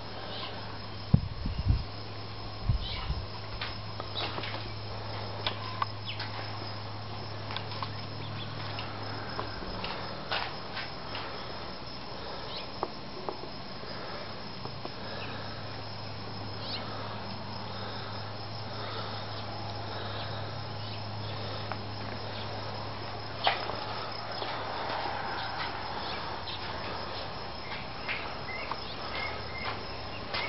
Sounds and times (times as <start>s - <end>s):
Cricket: 0.0s - 30.4s.